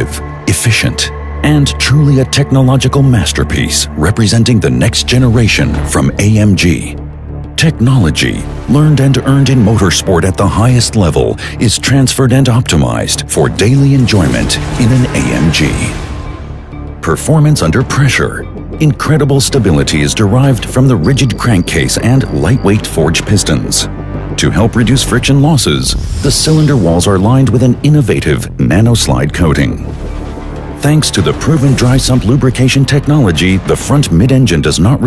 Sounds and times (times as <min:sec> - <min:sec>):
Speech: 0:00.0 - 0:07.0, 0:07.6 - 0:16.0, 0:17.0 - 0:29.9, 0:30.8 - 0:35.0
Music: 0:00.0 - 0:35.0.